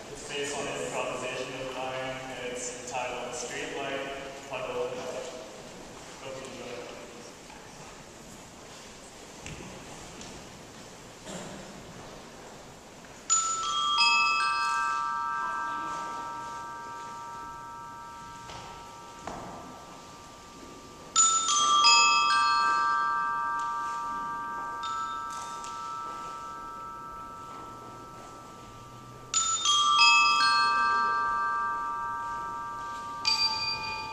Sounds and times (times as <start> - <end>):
Glockenspiel: 13.2 - 34.1
Marimba, xylophone: 13.2 - 34.1.